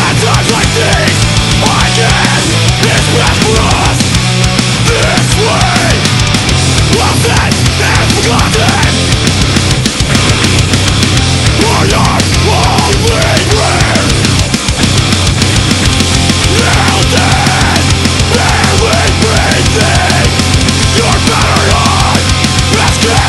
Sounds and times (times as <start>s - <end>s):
Music: 0.0s - 23.2s.